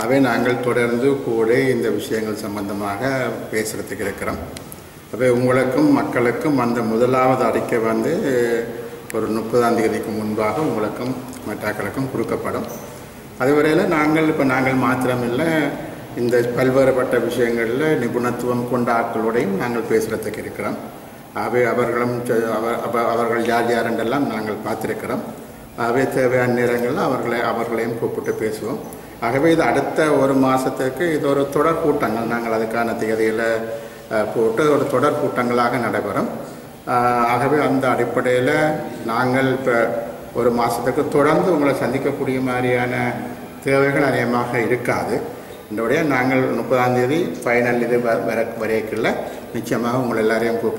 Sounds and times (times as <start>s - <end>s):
Male speech, man speaking: 0.0s - 4.5s, 5.2s - 12.8s, 13.4s - 50.7s
Narration, monologue: 0.0s - 50.7s.